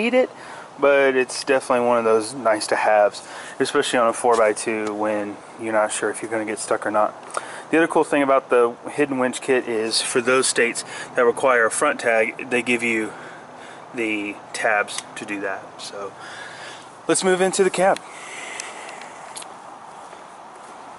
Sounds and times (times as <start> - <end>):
Speech: 0.0 - 13.2, 14.0 - 16.2, 17.1 - 18.0
Vehicle: 0.0 - 20.9.